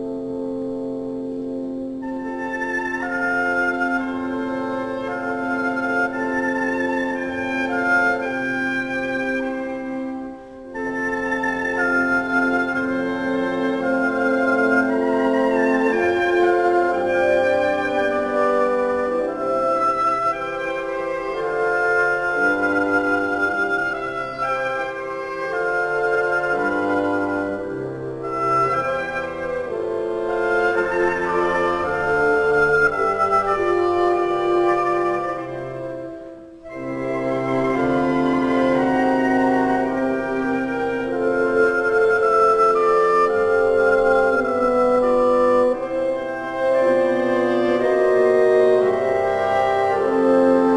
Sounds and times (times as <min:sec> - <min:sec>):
Musical instrument: 0:00.0 - 0:50.7.